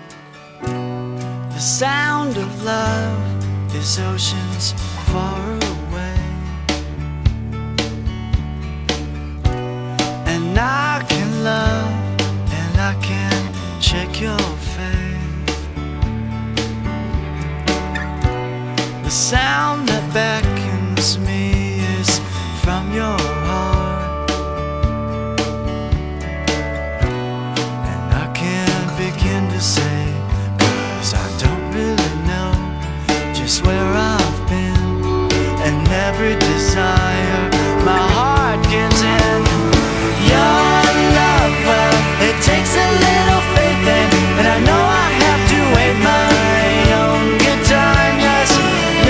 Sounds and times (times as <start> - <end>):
Music: 0.0 - 49.0.